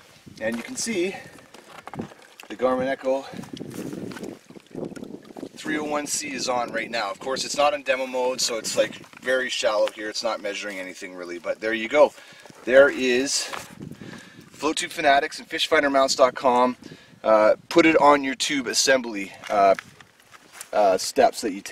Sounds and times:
Speech: 0.4 - 1.3, 2.5 - 3.4, 5.6 - 13.6, 14.6 - 19.8, 20.7 - 21.7.

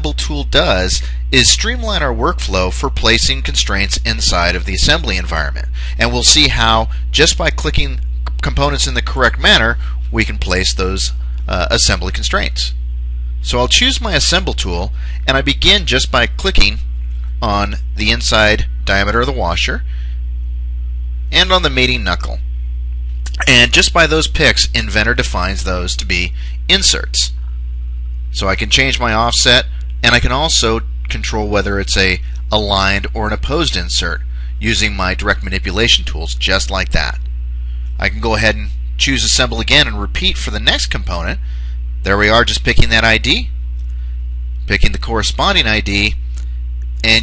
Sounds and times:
Speech: 0.0 - 12.8, 13.4 - 19.9, 21.3 - 22.4, 23.3 - 27.4, 28.3 - 37.3, 38.0 - 43.6, 44.6 - 46.2, 47.0 - 47.2.

